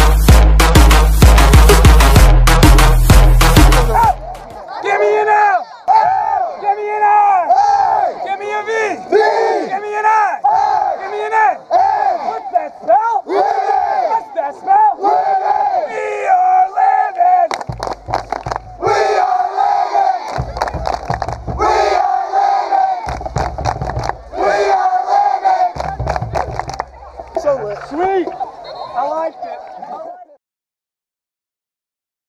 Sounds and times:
Crowd: 0.0s - 30.4s
Battle cry: 3.9s - 17.5s, 18.8s - 30.4s.

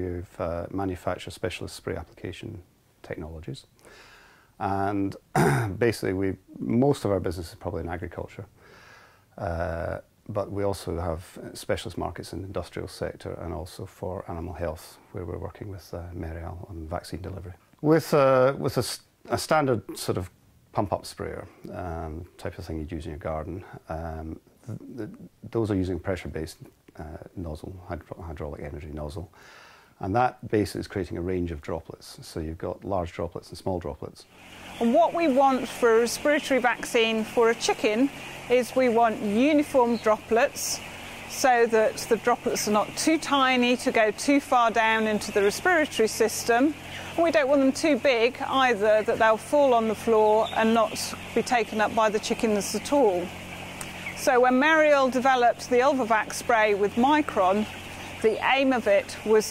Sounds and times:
Speech: 0.0s - 3.7s, 4.6s - 8.5s, 9.4s - 29.4s, 30.0s - 53.3s, 54.2s - 59.5s.

